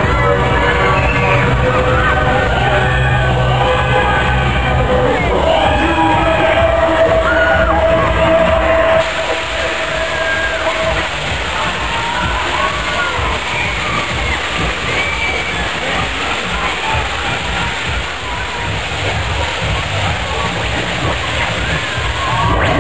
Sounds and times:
Music: 0:00.0 - 0:22.8.

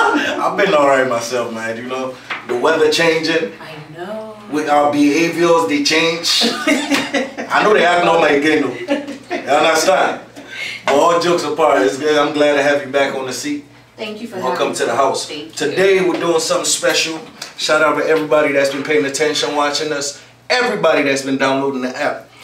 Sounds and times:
Speech: 0:07.5 - 0:08.8, 0:10.9 - 0:22.3.

